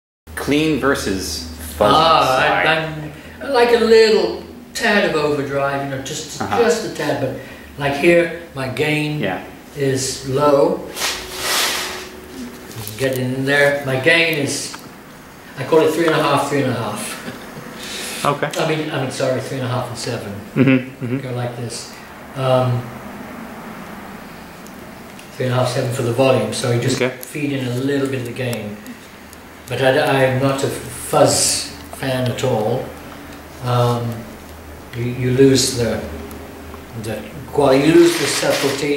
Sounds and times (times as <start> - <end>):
Speech: 0.4 - 10.9, 12.4 - 14.8, 15.6 - 17.3, 18.2 - 22.9, 25.4 - 28.9, 29.7 - 32.9, 33.6 - 34.3, 35.0 - 36.1, 37.0 - 38.9.